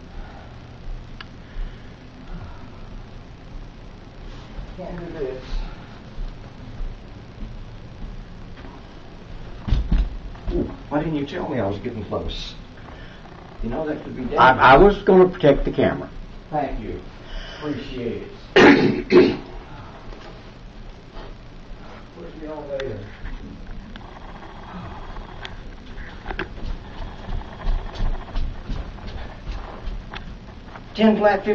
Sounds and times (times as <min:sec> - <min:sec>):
Walk, footsteps: 0:25.8 - 0:30.8.